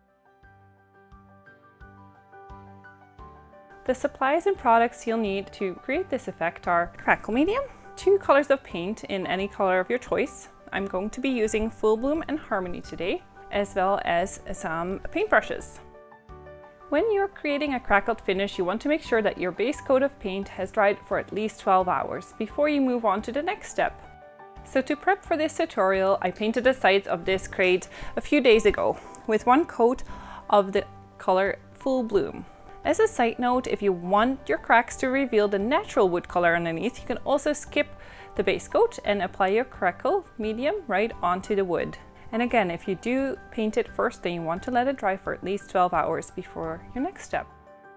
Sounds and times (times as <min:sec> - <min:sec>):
Music: 0:00.0 - 0:47.9
Speech: 0:03.9 - 0:15.8, 0:16.9 - 0:24.0, 0:24.7 - 0:47.5.